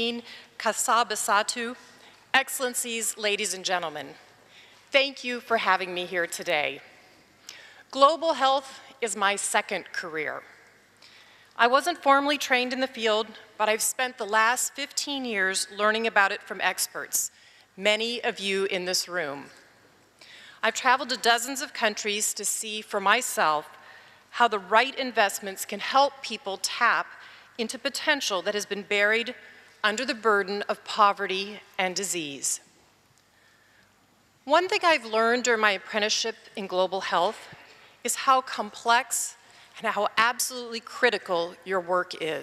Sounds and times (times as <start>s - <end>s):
Female speech, woman speaking: 0.0s - 1.8s, 2.4s - 4.2s, 5.0s - 6.8s, 8.0s - 10.4s, 11.6s - 19.5s, 20.6s - 23.7s, 24.4s - 27.0s, 27.6s - 32.6s, 34.5s - 37.4s, 38.1s - 42.4s.